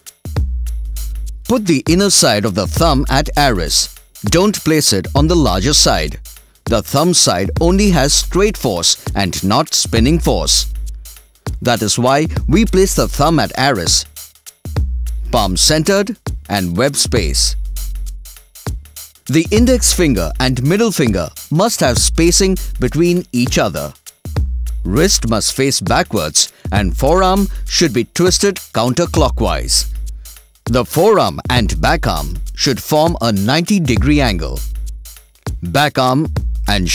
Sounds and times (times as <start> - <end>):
Music: 0.0 - 36.9
Speech: 1.5 - 10.7, 11.6 - 14.1, 15.3 - 17.6, 19.3 - 24.0, 24.9 - 30.0, 30.7 - 34.6, 35.6 - 36.9.